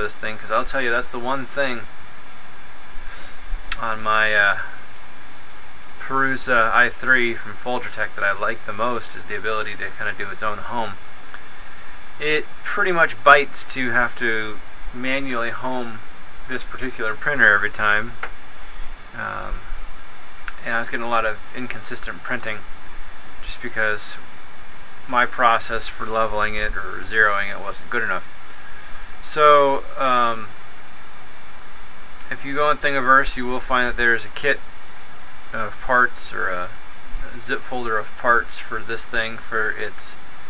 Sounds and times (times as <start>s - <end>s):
Speech: 0.0s - 1.9s, 3.8s - 4.8s, 6.0s - 11.0s, 12.2s - 18.2s, 19.2s - 19.7s, 20.5s - 22.6s, 23.4s - 24.2s, 25.1s - 28.3s, 29.2s - 30.5s, 32.3s - 34.6s, 35.5s - 40.2s.